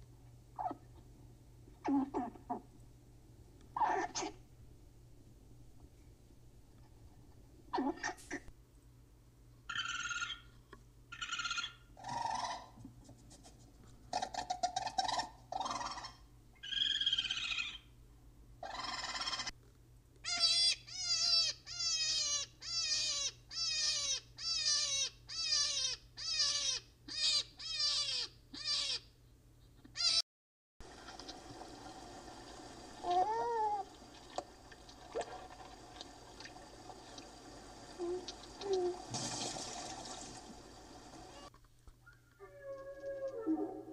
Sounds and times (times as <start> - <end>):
Animal: 0.6 - 1.0, 1.8 - 2.7, 3.8 - 4.4, 7.7 - 8.5, 9.7 - 12.9, 14.1 - 17.9, 18.6 - 19.6, 20.2 - 29.1, 29.7 - 30.2, 41.3 - 43.9.